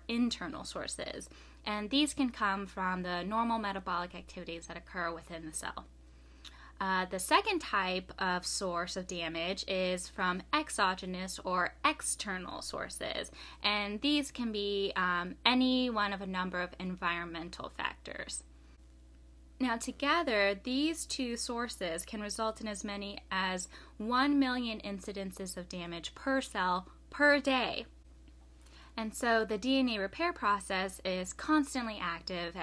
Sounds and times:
Speech: 0.0s - 5.9s, 6.8s - 18.4s, 19.6s - 27.9s, 29.0s - 32.6s.

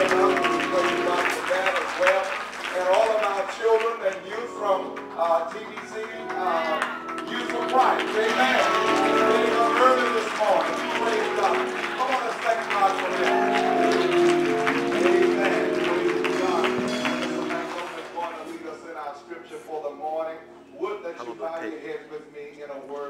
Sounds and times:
Speech: 0.0s - 13.2s, 17.6s - 23.0s
Tender music: 0.0s - 21.8s.

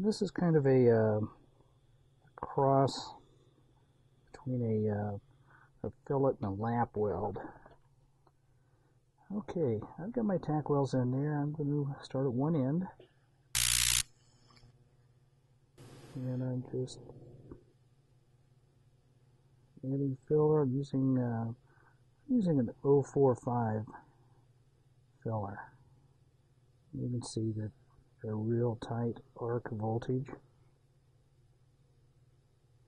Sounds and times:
Speech: 0.0s - 1.4s, 2.4s - 3.2s, 4.4s - 5.2s, 5.8s - 7.7s, 9.2s - 13.0s, 16.2s - 17.6s, 19.8s - 21.6s, 22.3s - 24.1s, 25.2s - 25.8s, 26.9s - 30.5s.

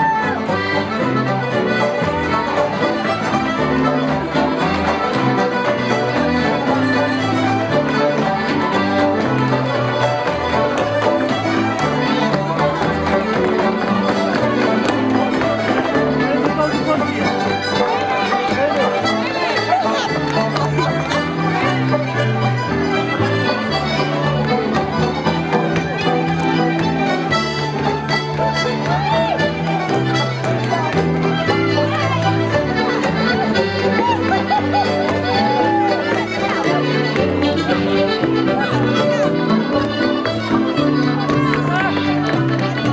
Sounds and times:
Music: 0.0s - 42.9s.

